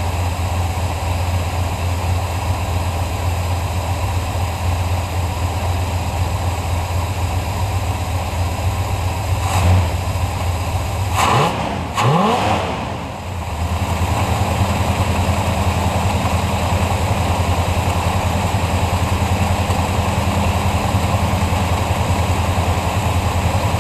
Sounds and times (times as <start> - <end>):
Outside, urban or manmade: 0.0 - 23.8
Vehicle: 0.0 - 23.8
Accelerating, revving, vroom: 9.4 - 10.0, 11.1 - 13.1.